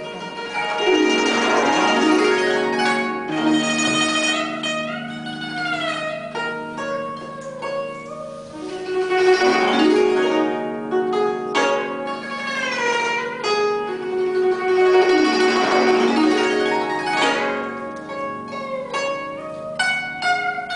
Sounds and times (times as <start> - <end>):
Zither: 0.0 - 20.7.